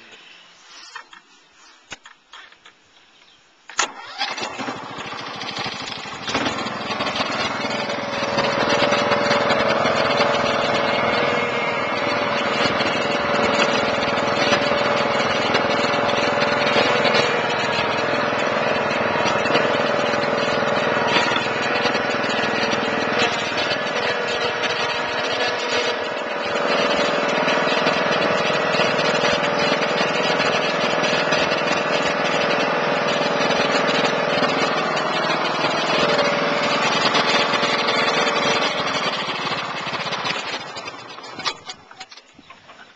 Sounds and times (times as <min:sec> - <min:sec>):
Lawn mower: 0:03.7 - 0:42.8
Vehicle: 0:03.8 - 0:42.9.